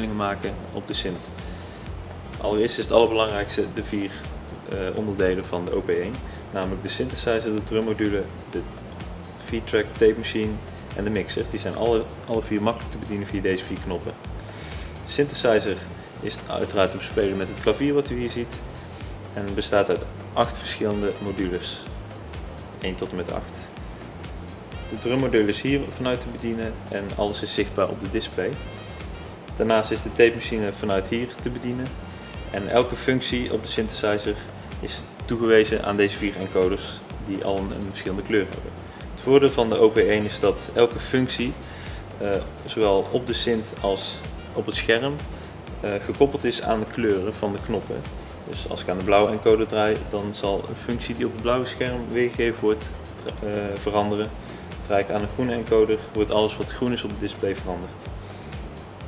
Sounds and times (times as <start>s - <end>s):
Speech: 0.0s - 1.3s, 2.4s - 8.7s, 9.4s - 14.2s, 15.0s - 18.6s, 19.3s - 21.9s, 22.8s - 23.7s, 24.9s - 28.6s, 29.6s - 58.0s
Music: 0.0s - 59.0s.